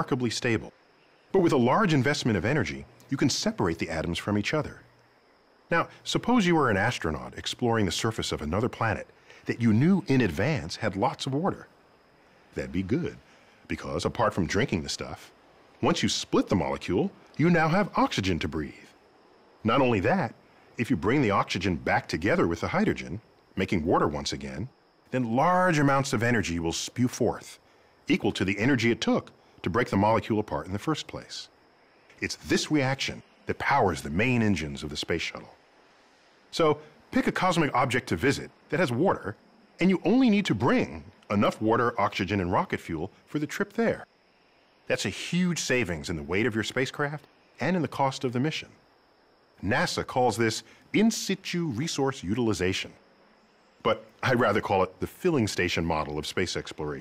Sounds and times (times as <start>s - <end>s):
Speech: 0.0s - 0.8s, 1.4s - 4.9s, 5.7s - 11.7s, 12.6s - 19.0s, 19.6s - 31.5s, 32.2s - 35.6s, 36.6s - 44.1s, 44.9s - 48.8s, 49.6s - 53.0s, 53.9s - 57.0s.